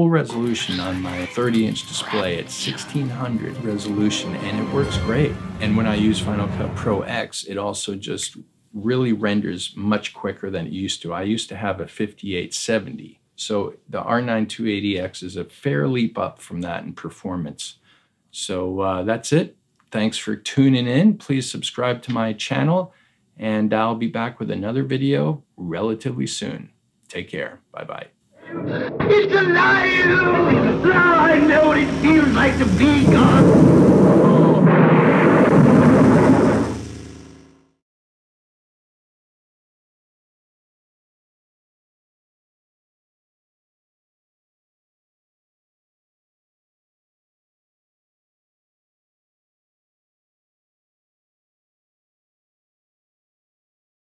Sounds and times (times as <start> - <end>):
Speech: 0.0 - 34.7.